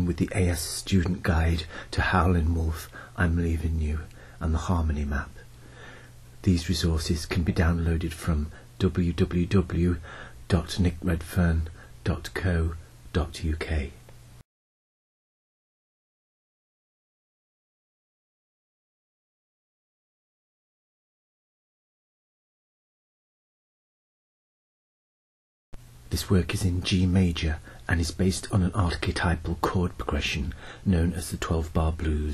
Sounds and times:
Speech: 0.0s - 5.4s, 6.4s - 14.0s, 26.1s - 32.3s.

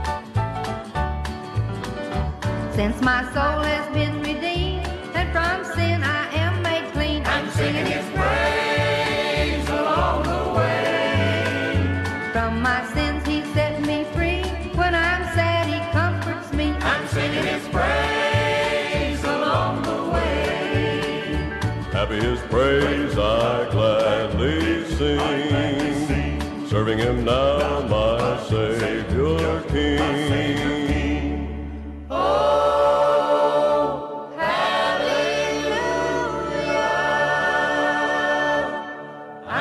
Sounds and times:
Choir: 7.2s - 12.3s, 16.8s - 39.6s
Male singing: 22.0s - 31.4s.

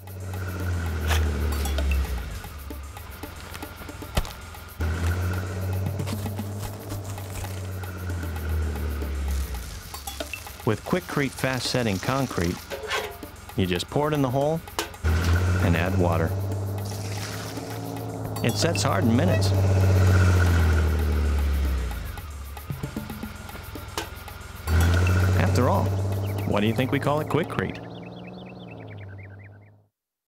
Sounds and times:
Accelerating, revving, vroom: 0.0s - 2.6s, 4.8s - 9.8s, 15.0s - 22.3s, 24.7s - 29.8s
Music: 0.0s - 27.9s
Vehicle: 0.0s - 29.9s
Speech: 10.7s - 12.6s, 13.6s - 14.6s, 15.6s - 16.3s, 18.4s - 19.6s, 25.4s - 27.9s.

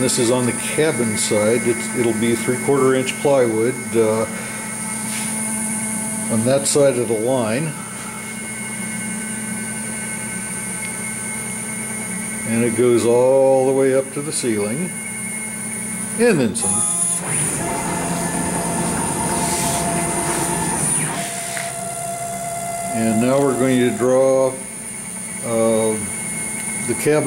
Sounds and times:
Speech: 0.0s - 4.4s, 6.3s - 7.8s, 12.5s - 15.0s, 16.2s - 16.8s, 22.9s - 24.6s, 25.4s - 26.1s, 26.8s - 27.2s.

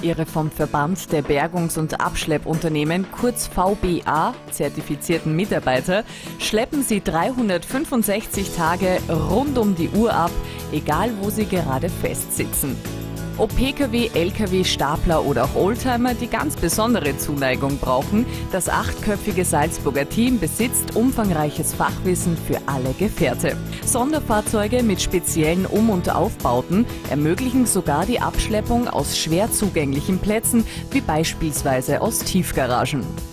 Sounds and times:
Speech: 0.0s - 12.8s, 13.4s - 33.1s
Music: 0.0s - 33.3s.

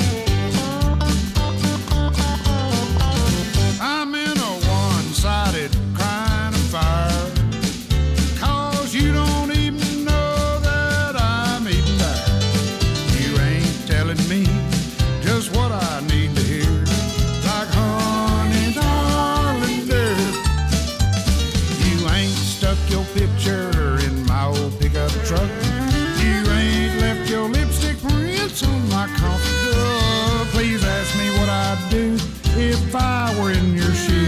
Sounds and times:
Music: 0.0s - 34.2s.

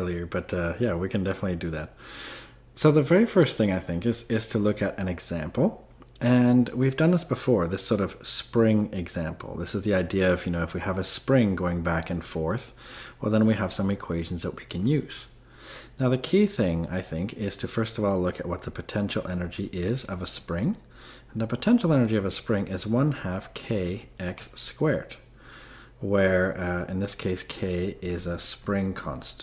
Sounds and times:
Speech: 0.0s - 2.0s, 2.8s - 15.3s, 16.0s - 25.2s, 26.0s - 29.4s.

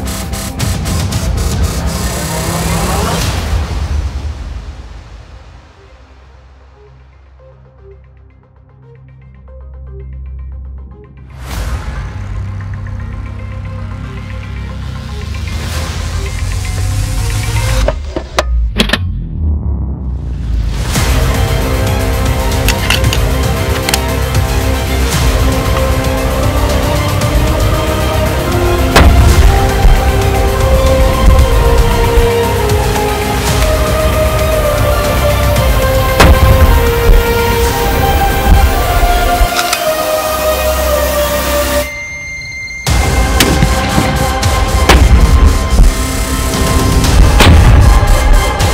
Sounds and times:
Music: 0.0s - 48.7s.

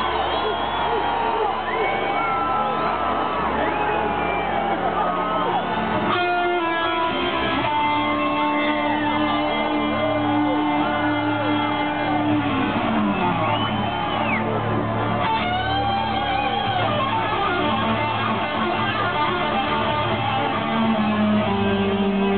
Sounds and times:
Electric guitar: 5.2s - 22.3s.

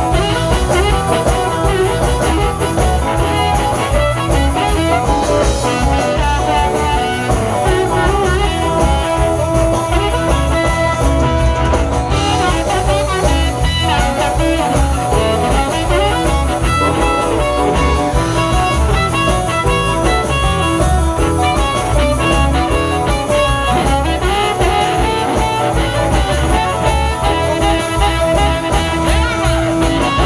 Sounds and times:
Blues: 0.0s - 30.2s.

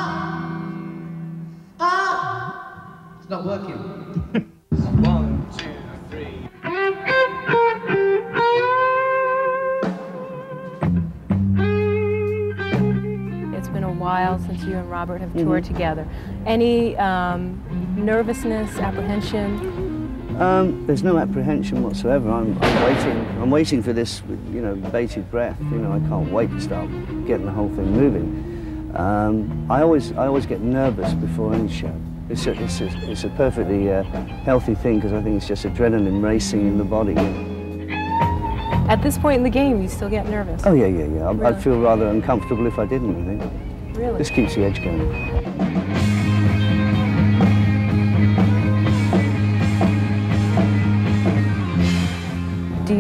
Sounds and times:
Music: 0.0s - 53.0s.

